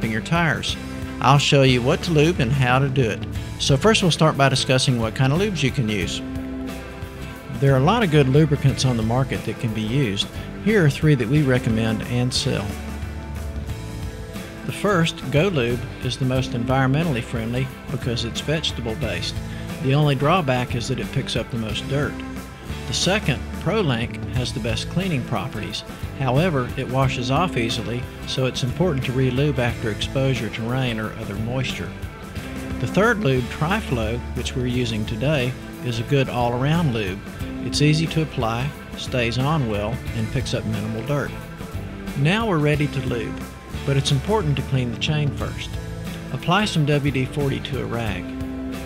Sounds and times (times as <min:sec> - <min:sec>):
Speech: 0:00.0 - 0:06.3, 0:07.5 - 0:12.8, 0:14.7 - 0:22.3, 0:22.9 - 0:32.0, 0:32.8 - 0:41.4, 0:42.2 - 0:48.3
Music: 0:00.0 - 0:48.8.